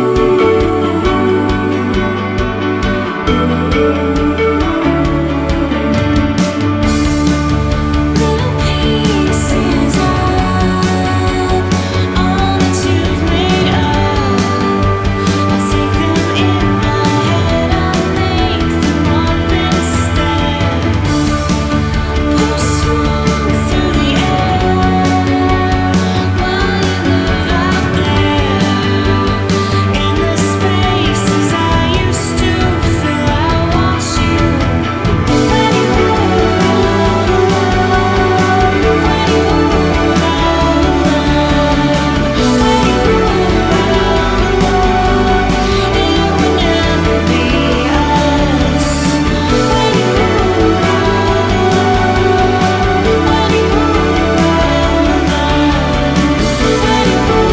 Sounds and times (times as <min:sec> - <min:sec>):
Music: 0:00.0 - 0:57.5.